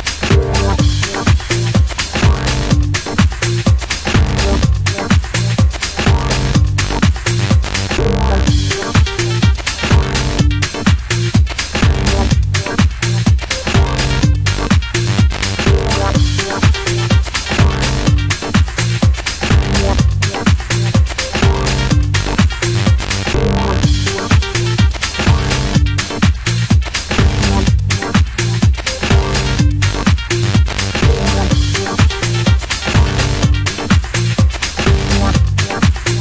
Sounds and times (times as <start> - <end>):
Dance music: 0.0 - 36.2
House music: 0.0 - 36.2.